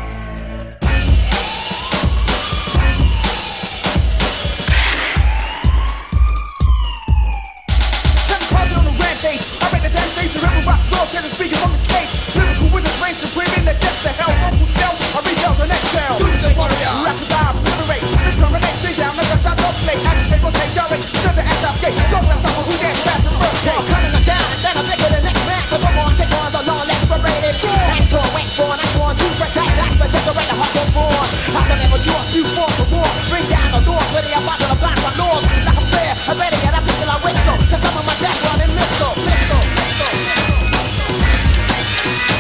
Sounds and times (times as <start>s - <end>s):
Music: 0.0s - 42.4s.